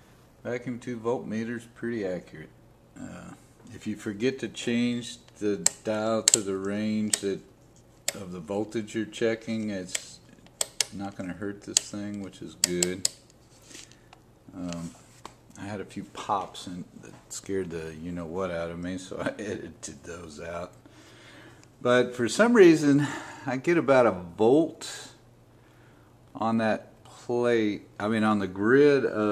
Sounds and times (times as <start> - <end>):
Speech: 0.4 - 7.5, 8.1 - 10.2, 11.0 - 13.1, 14.5 - 15.0, 15.6 - 20.8, 21.8 - 25.2, 26.4 - 29.3.